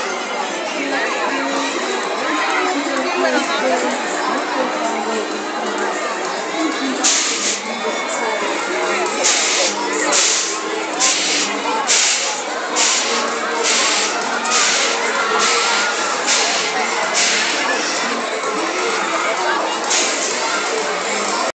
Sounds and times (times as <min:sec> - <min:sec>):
Speech: 0:00.0 - 0:21.5.